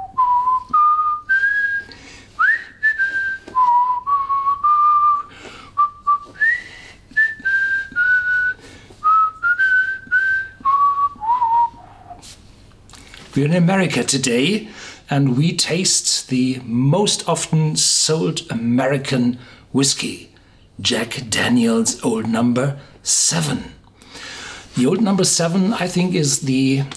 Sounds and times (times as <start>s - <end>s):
Whistling: 0.0s - 12.2s.